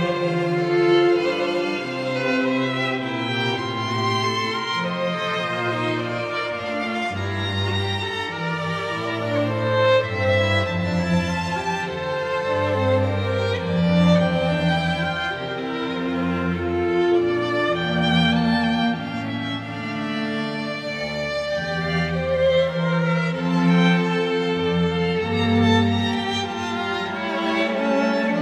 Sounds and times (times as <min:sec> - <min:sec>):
Classical music: 0:00.0 - 0:28.4.